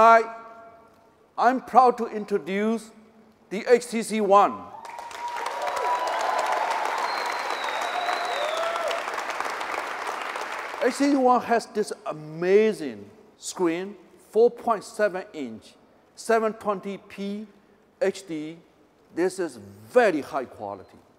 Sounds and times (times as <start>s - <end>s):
Speech: 0.0s - 0.4s, 1.4s - 4.6s, 10.8s - 18.6s, 19.2s - 21.1s.